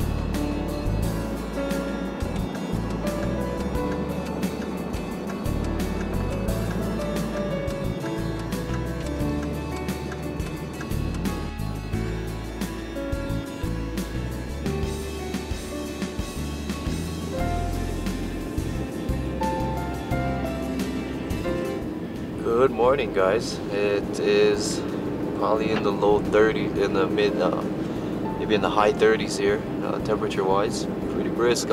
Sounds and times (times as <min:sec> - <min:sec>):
Music: 0:00.0 - 0:31.7
Speech: 0:22.4 - 0:24.8, 0:25.4 - 0:27.6, 0:28.4 - 0:31.7.